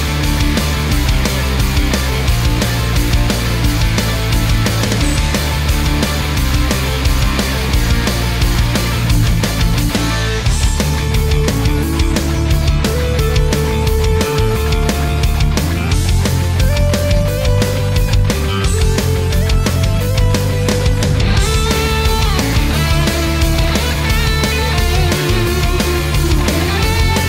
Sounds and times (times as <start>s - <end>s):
Music: 0.0s - 27.2s.